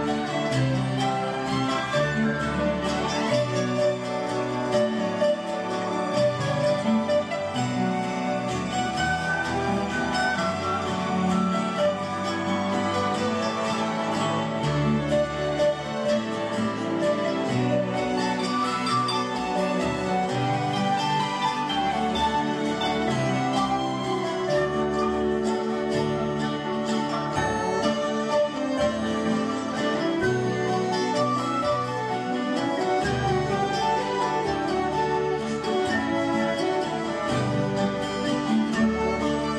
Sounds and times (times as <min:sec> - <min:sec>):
Harp: 0:00.0 - 0:39.5.